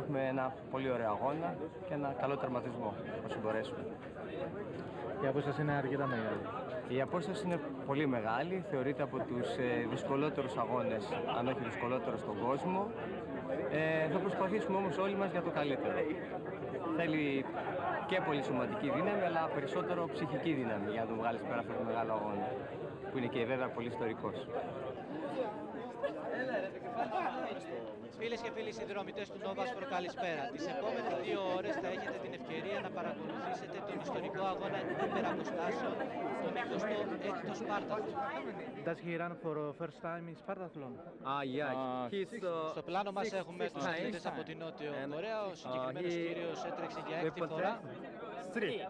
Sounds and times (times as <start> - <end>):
Speech: 0.0 - 48.9.